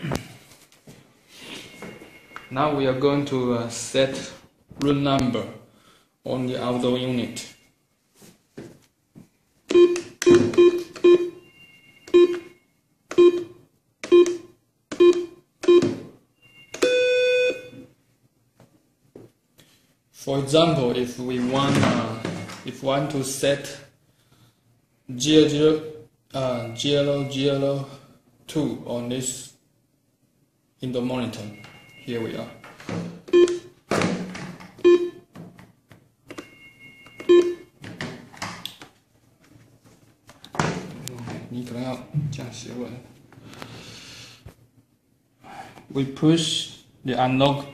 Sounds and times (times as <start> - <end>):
Telephone bell ringing: 9.8 - 13.5, 16.4 - 17.8, 31.4 - 32.8, 36.4 - 37.8.